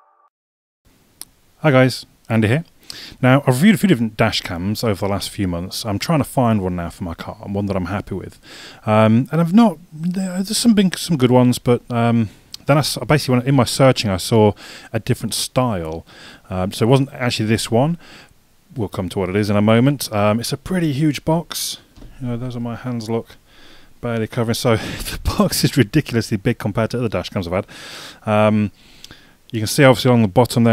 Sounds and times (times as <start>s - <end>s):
Speech: 1.6s - 18.0s, 18.7s - 23.4s, 24.0s - 27.7s, 28.3s - 28.7s, 29.5s - 30.7s.